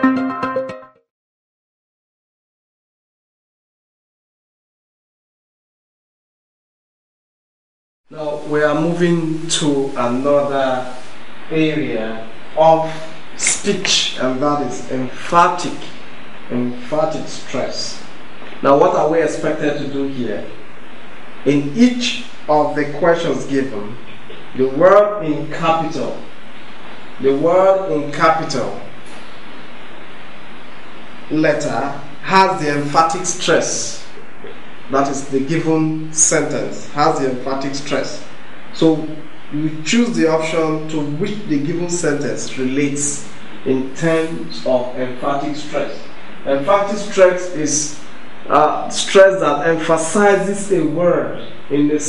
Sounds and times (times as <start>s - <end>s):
Narration, monologue: 8.1s - 52.0s
Male speech, man speaking: 8.2s - 20.6s, 21.5s - 24.0s, 24.6s - 26.3s, 27.2s - 28.9s, 31.3s - 34.2s, 34.9s - 52.0s.